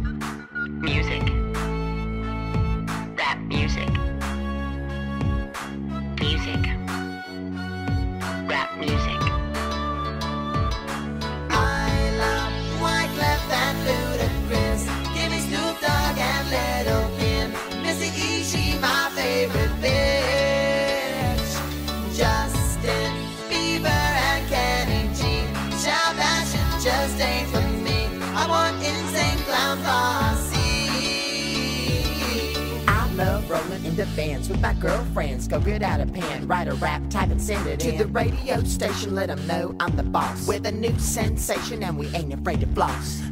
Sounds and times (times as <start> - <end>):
Music: 0.0 - 43.3.